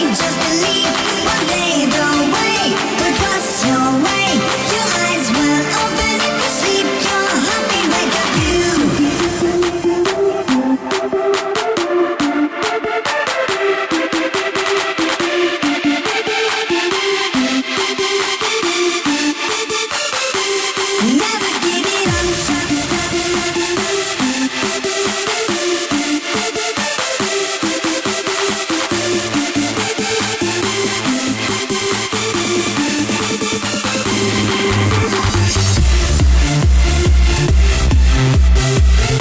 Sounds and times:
Music: 0.0s - 39.2s.

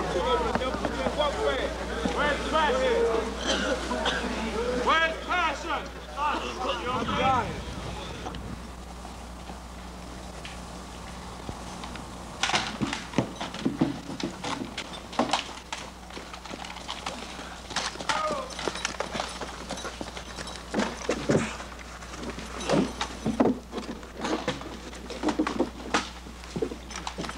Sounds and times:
Speech: 0.0s - 8.3s, 18.1s - 18.6s.

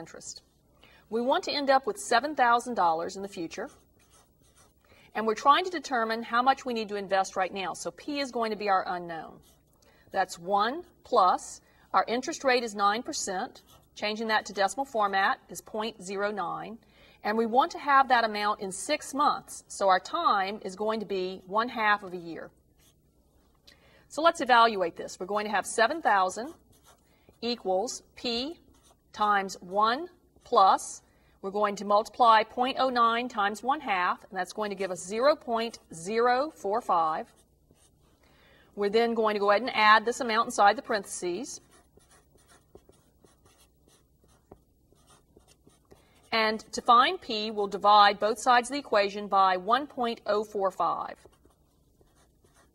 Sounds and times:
Speech: 1.1s - 3.8s, 5.2s - 9.5s, 10.2s - 22.5s, 24.2s - 26.6s, 27.4s - 28.6s, 29.2s - 37.4s, 38.8s - 41.7s, 46.3s - 51.3s
Writing: 3.4s - 4.9s, 9.2s - 11.0s, 13.0s - 15.2s, 22.7s - 23.1s, 25.4s - 30.8s, 36.9s - 38.2s, 40.7s - 46.9s, 50.7s - 52.7s.

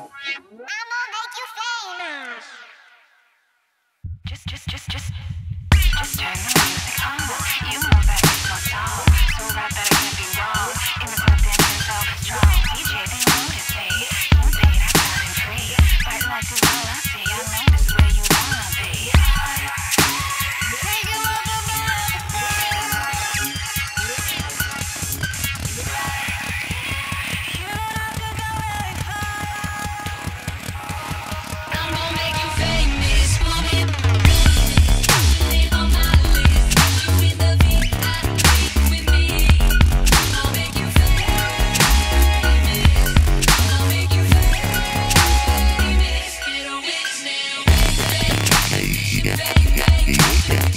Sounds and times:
Dubstep: 4.3s - 50.7s.

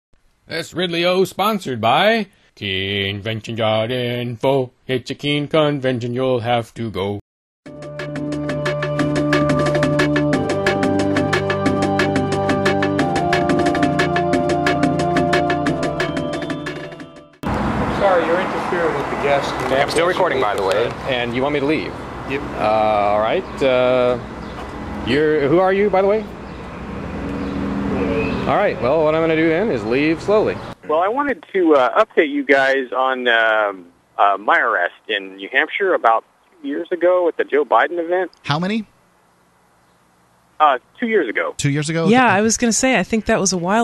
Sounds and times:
Speech synthesizer: 0.5s - 7.2s, 30.8s - 38.8s, 40.6s - 43.8s.

